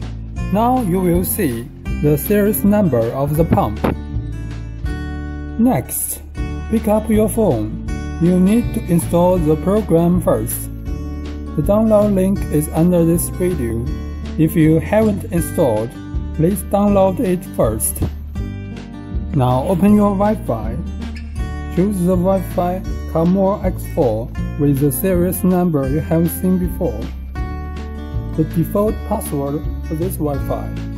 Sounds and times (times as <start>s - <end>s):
Music: 0.0s - 30.9s
Speech: 0.5s - 4.0s, 5.6s - 10.7s, 11.6s - 18.2s, 19.3s - 20.9s, 21.8s - 27.2s, 28.4s - 30.8s.